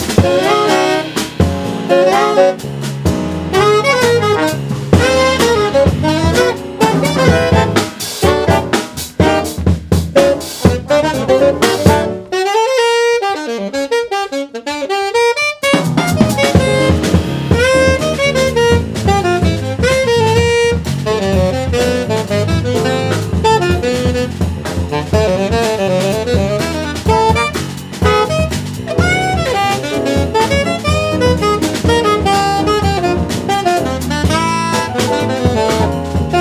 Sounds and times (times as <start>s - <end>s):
Jazz: 0.0s - 36.4s
Saxophone: 0.0s - 36.4s.